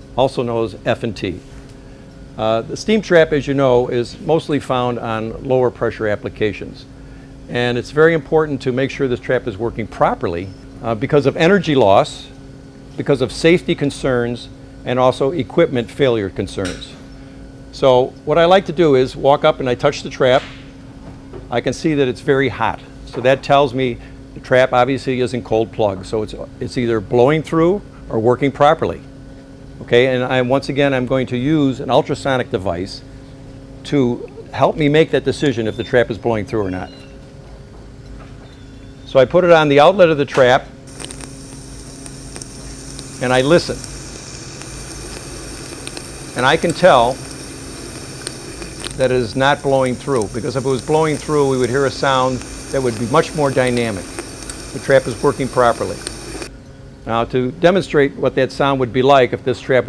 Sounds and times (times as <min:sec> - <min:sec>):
Speech: 0:00.2 - 0:01.4, 0:02.4 - 0:06.9, 0:07.5 - 0:12.4, 0:13.0 - 0:17.0, 0:17.7 - 0:20.5, 0:21.5 - 0:29.1, 0:29.8 - 0:33.0, 0:33.8 - 0:37.0, 0:39.1 - 0:40.7, 0:43.2 - 0:43.8, 0:46.4 - 0:47.2, 0:49.0 - 0:54.1, 0:54.8 - 0:56.0, 0:57.0 - 0:59.8.